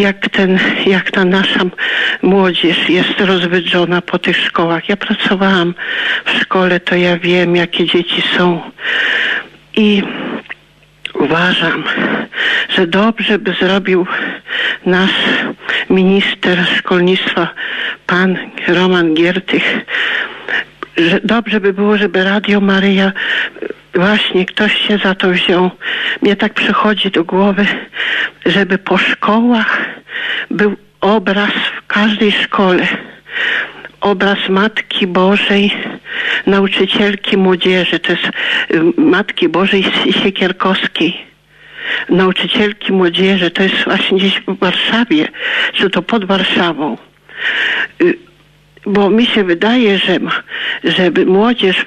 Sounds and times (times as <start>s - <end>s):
Speech: 0.0s - 8.8s, 9.8s - 19.9s, 20.5s - 33.2s, 33.9s - 41.3s, 42.0s - 47.1s, 48.0s - 48.2s, 48.8s - 51.8s.